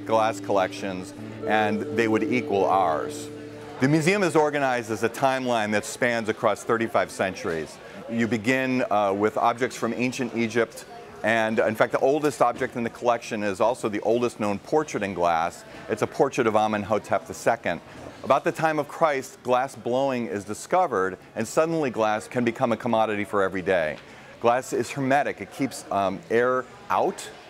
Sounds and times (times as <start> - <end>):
Music: 0.0 - 5.0
Speech: 0.0 - 27.5.